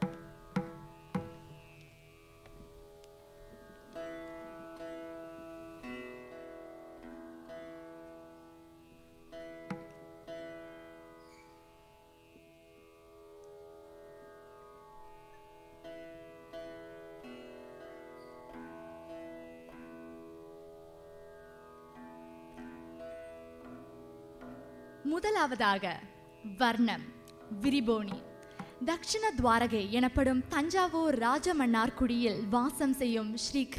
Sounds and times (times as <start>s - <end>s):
Bowed string instrument: 0.0s - 33.7s
Sitar: 0.0s - 33.7s.